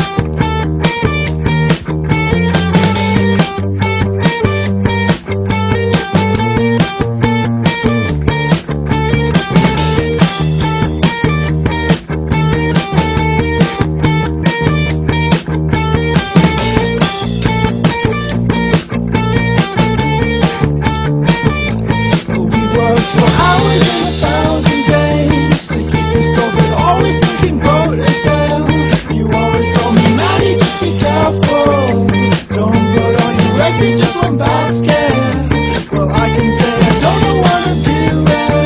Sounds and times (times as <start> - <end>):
Music: 0.0 - 38.6.